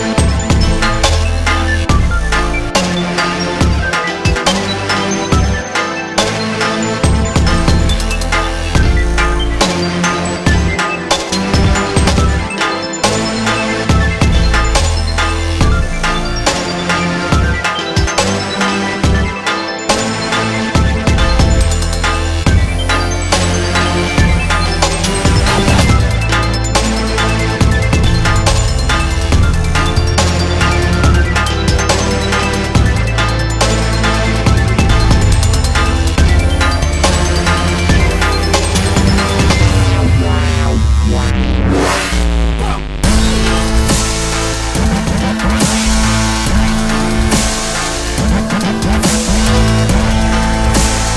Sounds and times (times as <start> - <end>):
Dubstep: 0.0 - 51.1.